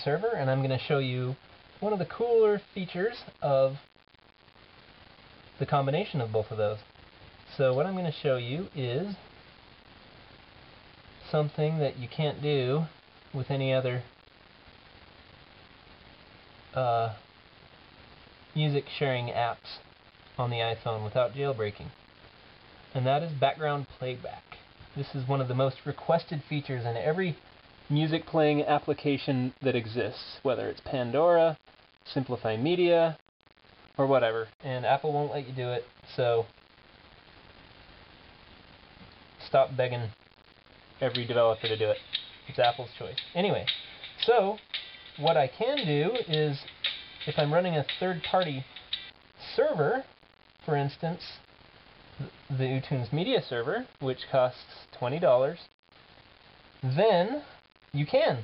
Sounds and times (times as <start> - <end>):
Speech: 0.0 - 3.8, 5.6 - 6.9, 7.5 - 9.2, 11.2 - 14.1, 16.7 - 17.2, 18.6 - 22.0, 22.9 - 33.2, 34.0 - 36.5, 39.4 - 40.2, 41.0 - 44.6, 45.2 - 48.7, 49.4 - 50.1, 50.7 - 51.5, 52.2 - 55.7, 56.8 - 58.4.